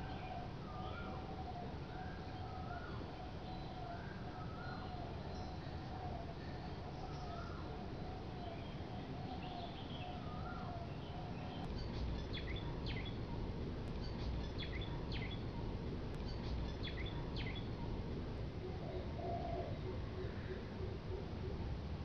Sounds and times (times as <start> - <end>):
Rustling leaves: 0.0 - 22.0.